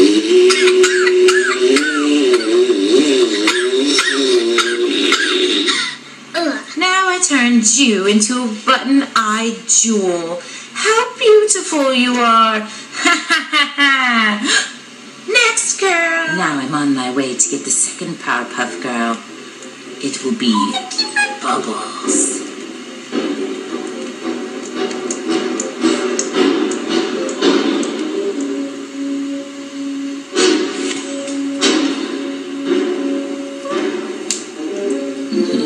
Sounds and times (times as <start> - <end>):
Music: 0.0 - 35.6
Television: 0.0 - 35.6
Speech: 6.4 - 12.8, 15.3 - 19.3, 20.0 - 22.4.